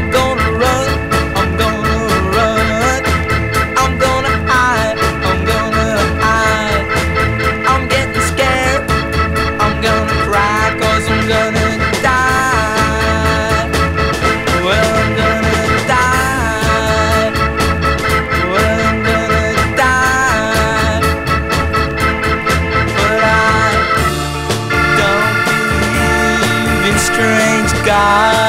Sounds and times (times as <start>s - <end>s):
Music: 0.0s - 28.4s.